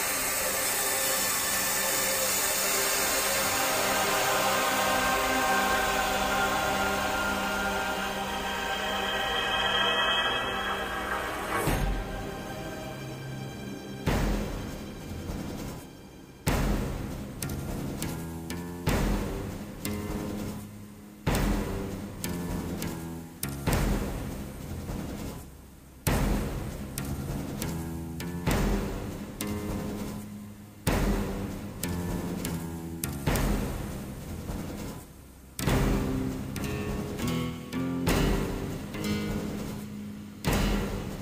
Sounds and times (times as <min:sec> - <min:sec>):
Music: 0:00.0 - 0:41.2.